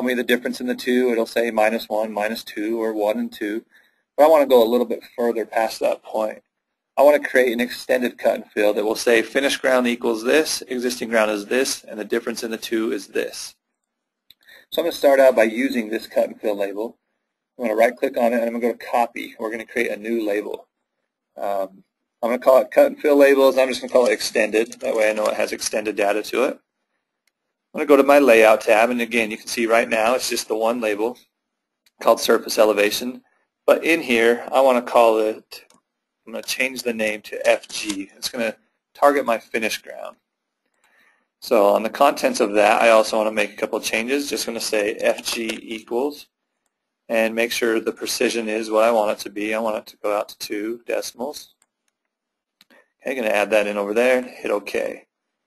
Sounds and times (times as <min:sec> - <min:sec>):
Speech: 0:00.0 - 0:06.4, 0:07.0 - 0:13.6, 0:14.5 - 0:17.0, 0:17.6 - 0:20.7, 0:21.4 - 0:26.6, 0:27.8 - 0:31.2, 0:32.0 - 0:35.7, 0:36.3 - 0:40.2, 0:41.4 - 0:46.4, 0:47.1 - 0:51.6, 0:53.0 - 0:55.1.